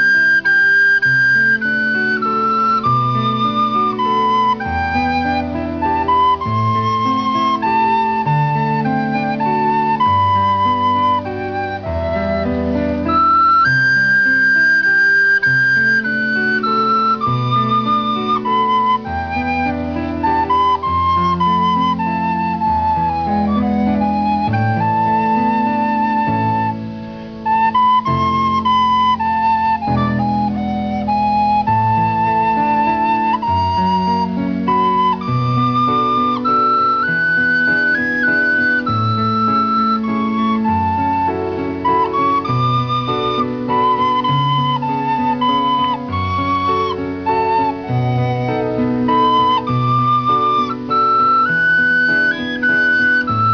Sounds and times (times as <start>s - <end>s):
Flute: 0.0s - 53.5s.